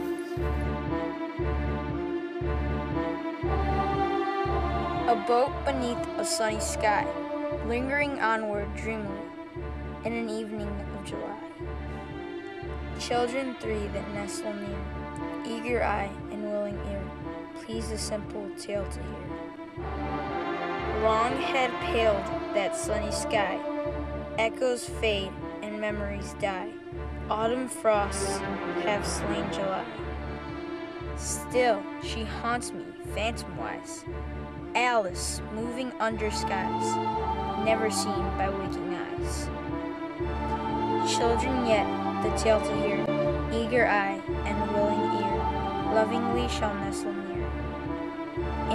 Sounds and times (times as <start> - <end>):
Music: 0.0 - 48.7
Speech: 5.0 - 9.3, 10.0 - 11.5, 13.0 - 14.8, 15.4 - 19.3, 21.0 - 23.6, 24.4 - 26.7, 27.3 - 30.0, 31.2 - 34.1, 34.8 - 37.0, 37.6 - 39.5, 41.1 - 47.4.